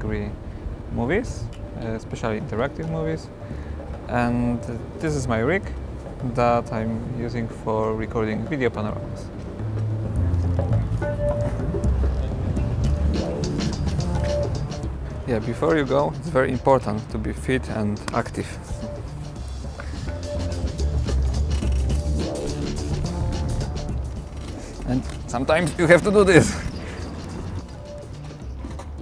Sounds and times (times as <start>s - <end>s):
Speech: 0.0s - 3.3s, 4.1s - 9.3s, 15.3s - 18.6s, 24.9s - 26.6s
Music: 1.1s - 29.0s.